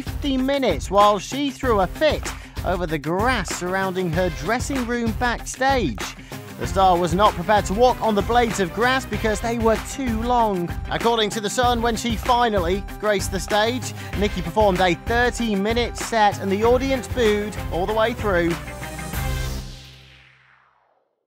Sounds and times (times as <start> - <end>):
Speech: 0.0 - 18.6
Music: 0.0 - 20.9.